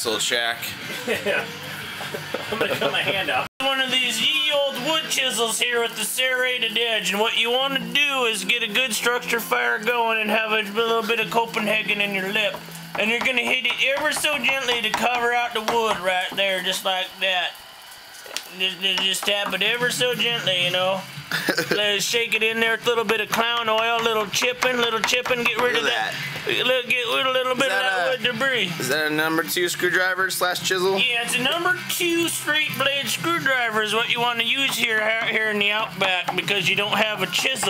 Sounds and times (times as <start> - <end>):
Speech: 0.0 - 0.8, 2.8 - 17.6, 18.5 - 21.0, 21.7 - 37.7.